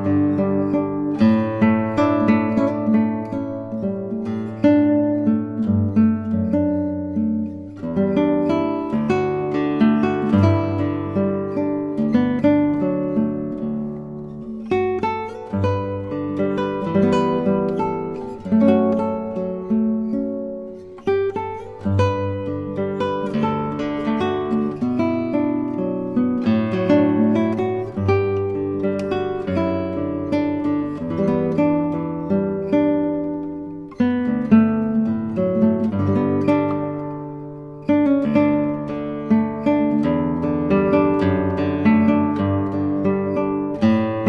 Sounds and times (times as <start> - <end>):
Strum: 0.0 - 44.2.